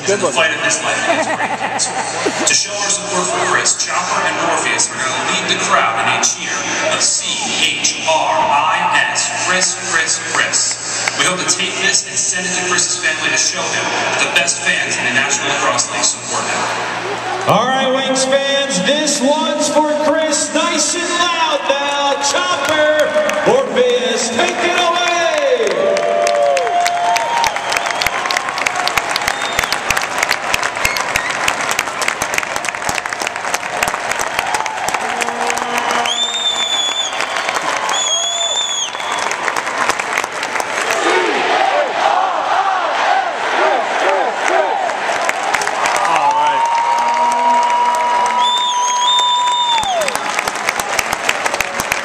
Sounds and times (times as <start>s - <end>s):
Speech: 0.0s - 1.2s, 2.4s - 16.7s, 17.5s - 25.9s.